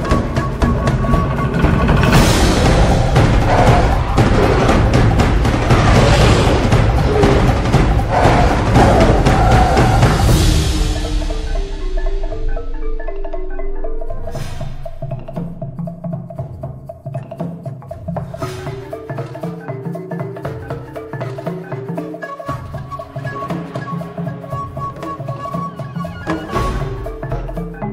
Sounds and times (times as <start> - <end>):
Music: 0.0 - 27.9.